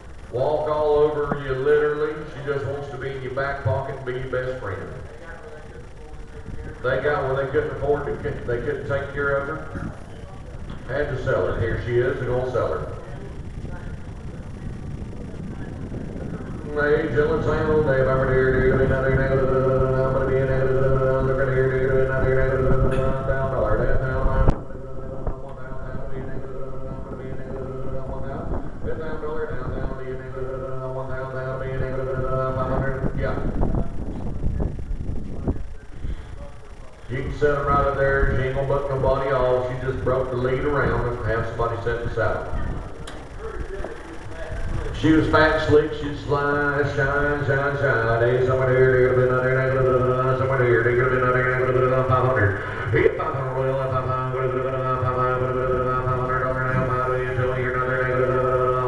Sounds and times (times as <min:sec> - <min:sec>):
Speech: 0:00.3 - 0:58.8.